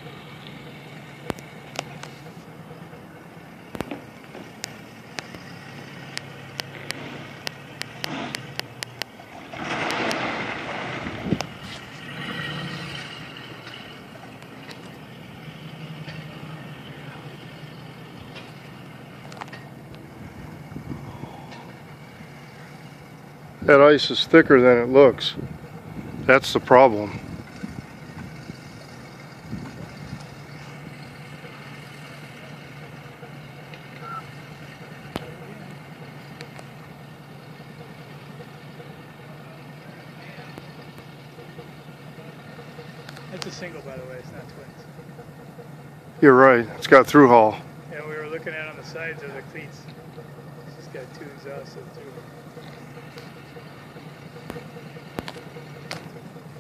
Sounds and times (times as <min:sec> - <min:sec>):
Motorboat, speedboat: 0:00.0 - 0:56.6.